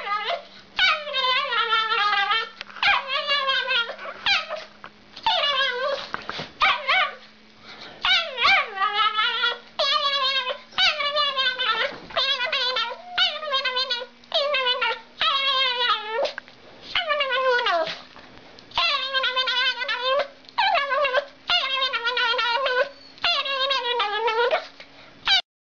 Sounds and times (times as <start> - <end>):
Dog: 0.0 - 7.3, 8.0 - 18.1, 18.7 - 25.4.